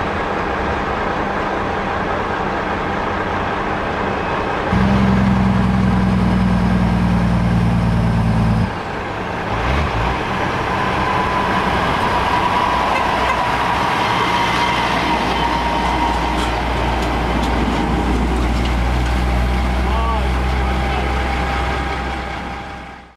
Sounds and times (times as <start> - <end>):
Truck: 0.0 - 23.1.